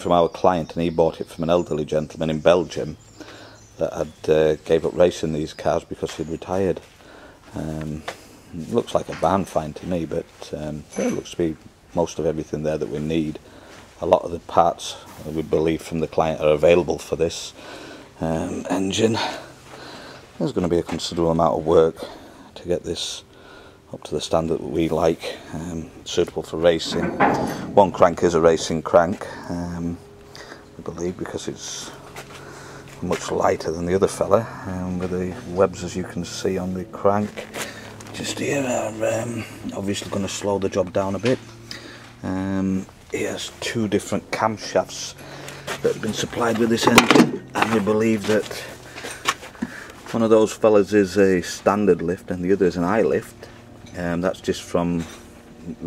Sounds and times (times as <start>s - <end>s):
Speech: 0.0s - 3.0s, 3.8s - 6.9s, 7.5s - 13.4s, 14.0s - 17.6s, 18.2s - 19.5s, 20.4s - 23.2s, 23.9s - 30.0s, 30.8s - 32.0s, 33.0s - 37.5s, 38.1s - 41.5s, 42.2s - 45.2s, 45.8s - 48.8s, 50.1s - 55.8s.